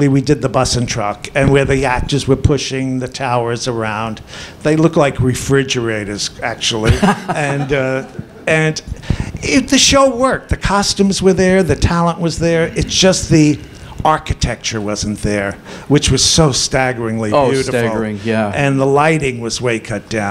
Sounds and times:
Speech: 0:00.0 - 0:20.3.

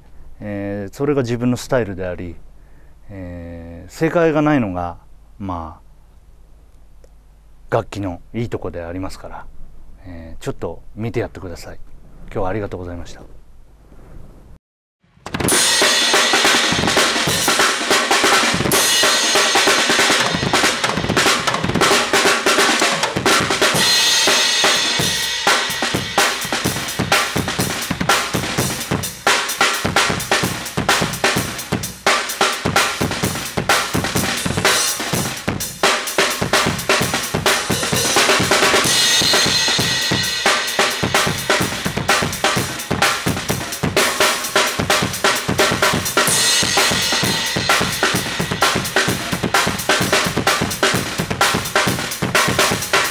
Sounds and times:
Drum kit: 0:15.1 - 0:53.1
Bass drum: 0:15.2 - 0:53.1.

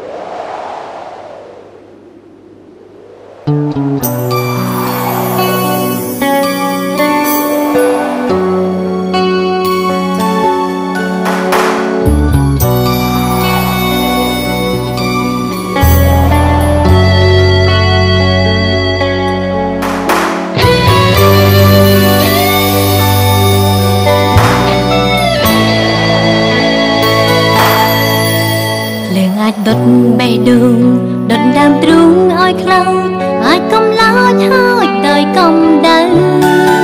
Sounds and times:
Music: 0:03.5 - 0:36.8.

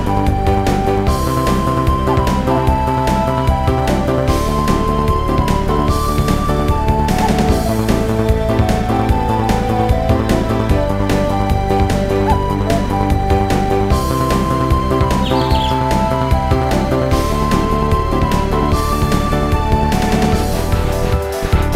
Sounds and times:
Music: 0:00.0 - 0:21.7.

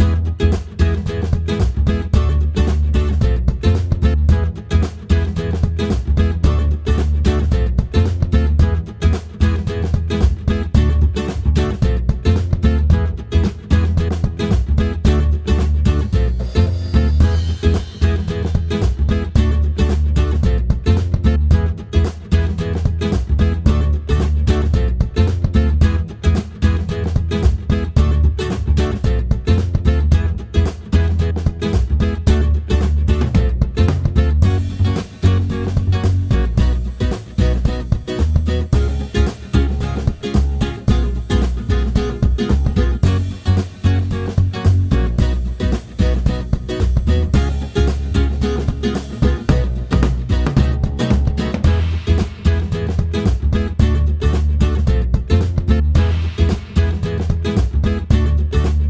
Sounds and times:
Music: 0:00.0 - 0:58.9.

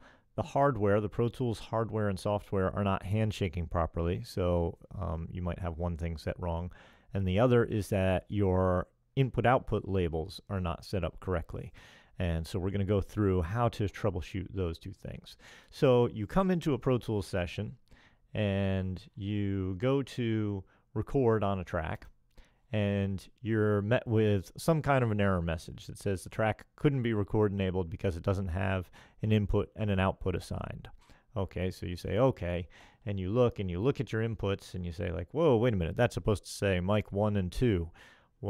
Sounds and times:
Speech: 0:00.4 - 0:38.4.

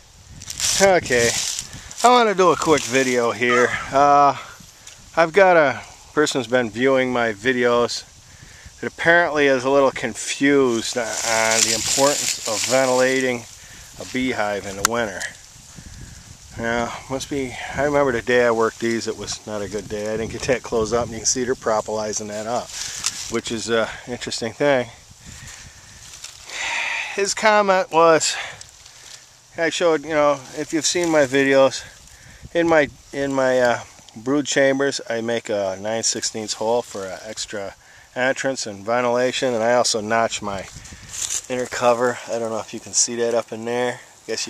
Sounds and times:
Speech: 0:00.7 - 0:04.6, 0:05.2 - 0:08.1, 0:08.8 - 0:15.4, 0:16.5 - 0:25.0, 0:26.6 - 0:28.6, 0:29.6 - 0:32.0, 0:32.6 - 0:40.7, 0:41.4 - 0:44.5.

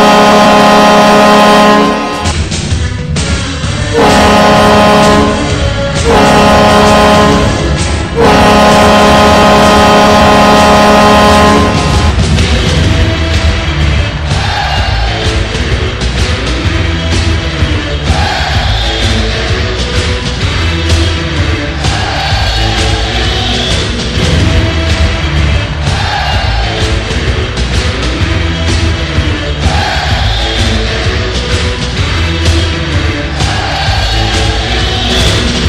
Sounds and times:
Music: 0:00.0 - 0:35.6.

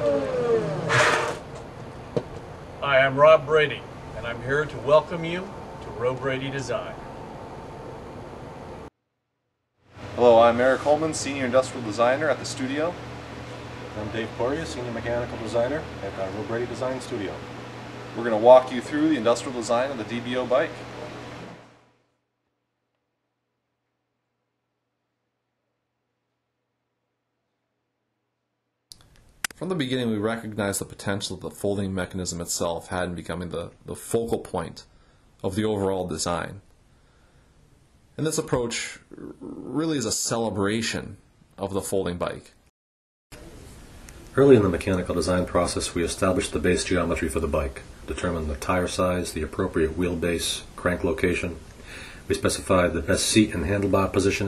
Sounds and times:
Speech: 0:02.8 - 0:07.0, 0:10.2 - 0:13.0, 0:14.0 - 0:17.4, 0:18.2 - 0:20.8, 0:29.6 - 0:36.6, 0:38.2 - 0:42.6, 0:44.4 - 0:51.6, 0:52.3 - 0:54.4.

